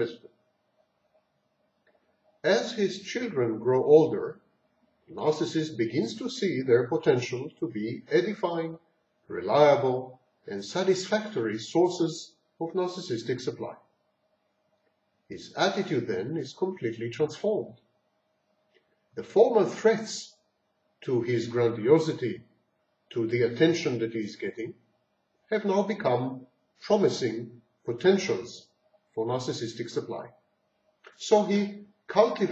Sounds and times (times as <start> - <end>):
Speech: 0.0 - 0.3, 2.4 - 4.4, 5.1 - 13.9, 15.3 - 17.8, 19.2 - 20.4, 21.0 - 22.4, 23.1 - 24.8, 25.5 - 30.4, 31.1 - 32.5.